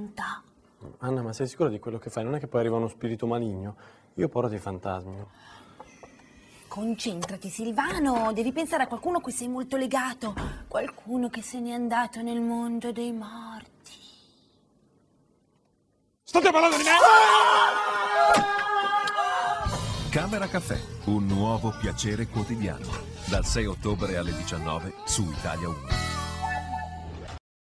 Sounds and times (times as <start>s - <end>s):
Music: 19.7s - 27.4s.